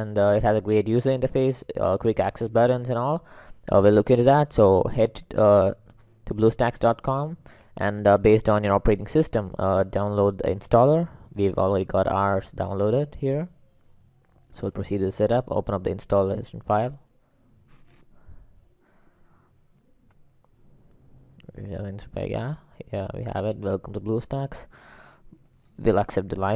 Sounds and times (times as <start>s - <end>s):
Speech: 0.0s - 13.6s, 14.5s - 17.1s, 21.4s - 24.7s, 25.8s - 26.5s.